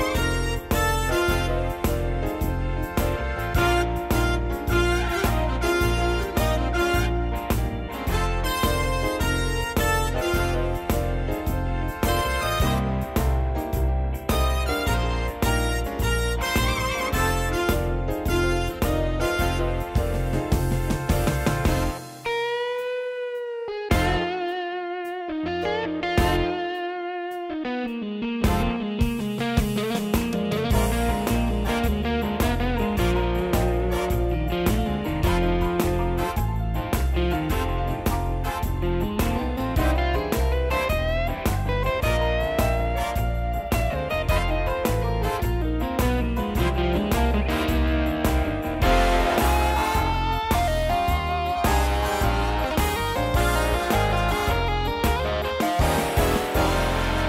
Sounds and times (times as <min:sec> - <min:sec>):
Music: 0:00.0 - 0:57.2.